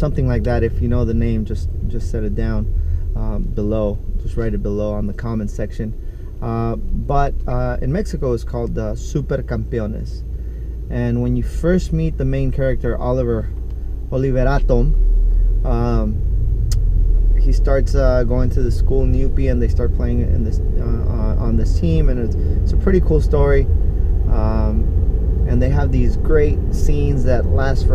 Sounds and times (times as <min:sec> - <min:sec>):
Speech: 0:00.0 - 0:10.2, 0:10.9 - 0:13.5, 0:14.1 - 0:15.0, 0:15.7 - 0:16.2, 0:17.4 - 0:23.7, 0:24.3 - 0:24.8, 0:25.5 - 0:27.9
Vehicle: 0:00.0 - 0:27.9.